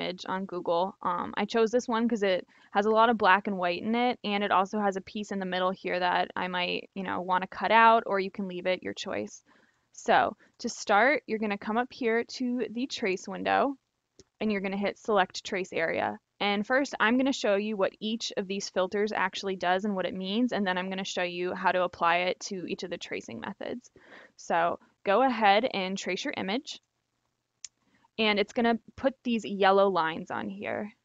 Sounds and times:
Speech: 0.0 - 9.4, 10.0 - 13.8, 14.4 - 26.8, 28.2 - 31.0.

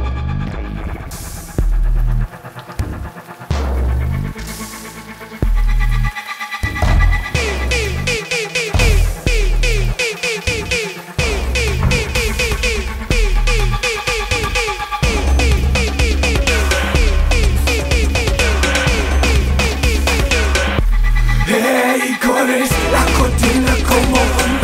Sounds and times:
Music: 0.0 - 24.6.

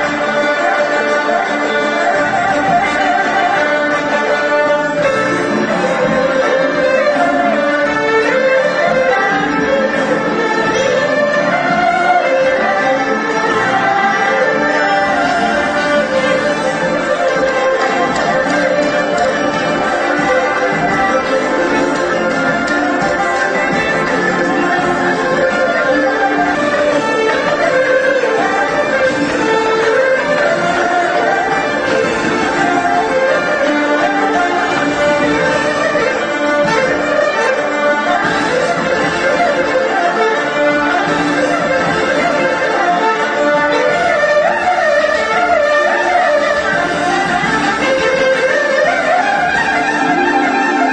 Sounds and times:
Music: 0.0 - 50.9.

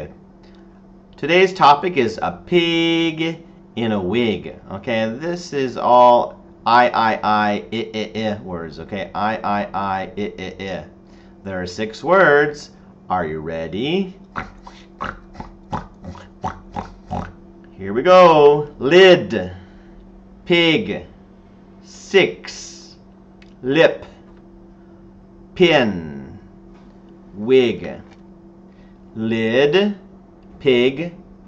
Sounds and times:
Speech: 1.2 - 10.9, 11.5 - 19.6, 20.5 - 21.1, 21.9 - 23.0, 23.6 - 24.2, 25.6 - 26.5, 27.4 - 28.1, 29.2 - 30.0, 30.6 - 31.2.

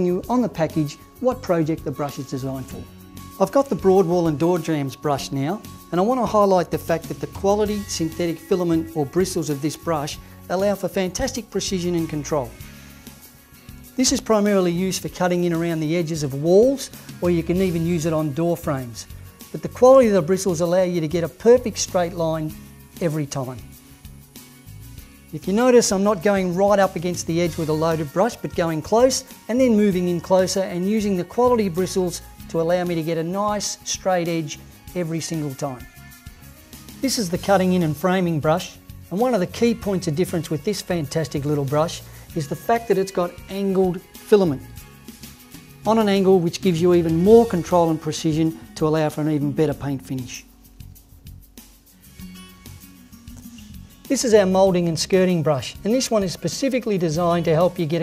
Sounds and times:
Speech: 0.0 - 12.6, 14.0 - 23.7, 25.3 - 35.9, 37.0 - 44.7, 45.8 - 50.5, 54.1 - 58.0
Music: 0.0 - 58.0.

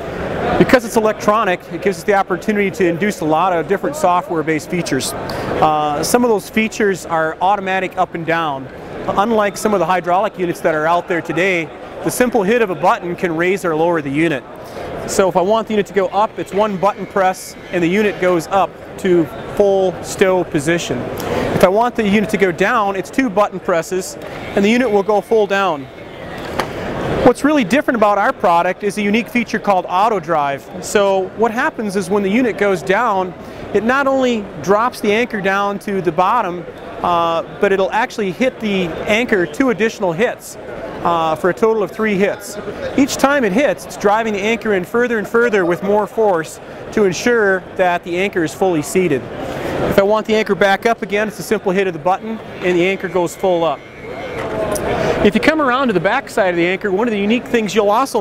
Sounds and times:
Speech: 0.4 - 25.9, 27.2 - 49.3, 49.9 - 53.8, 54.7 - 58.2.

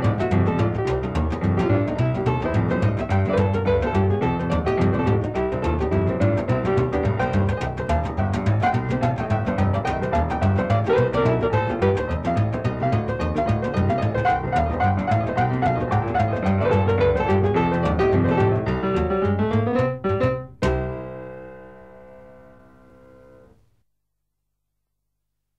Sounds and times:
Piano: 0.0 - 23.8.

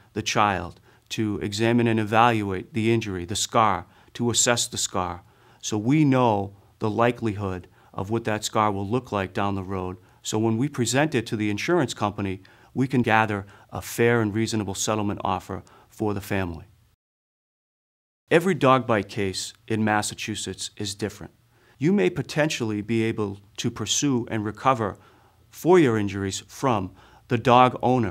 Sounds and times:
Speech: 0.0 - 16.7, 18.3 - 28.1.

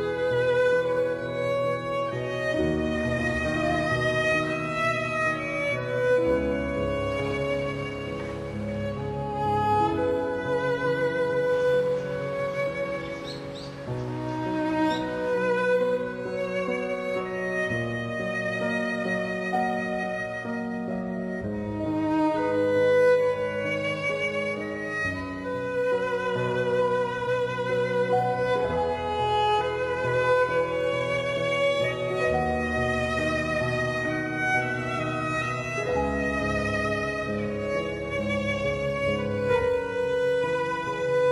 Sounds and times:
Music: 0.0 - 41.3.

